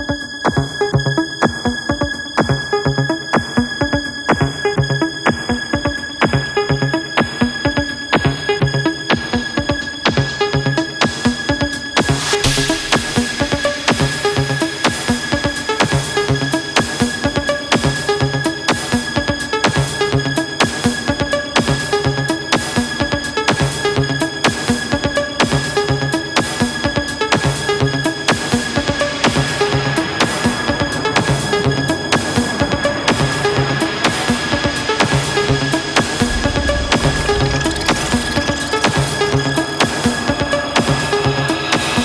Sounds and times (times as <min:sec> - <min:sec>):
Music: 0:00.0 - 0:42.0.